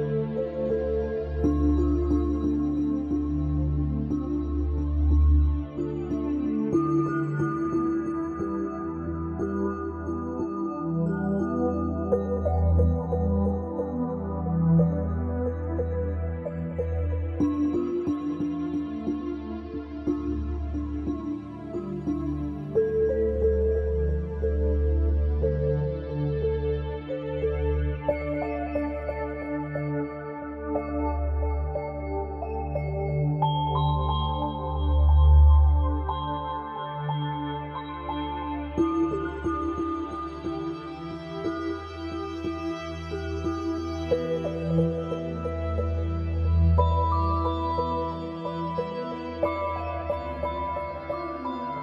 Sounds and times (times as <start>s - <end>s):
Music: 0.0s - 51.8s.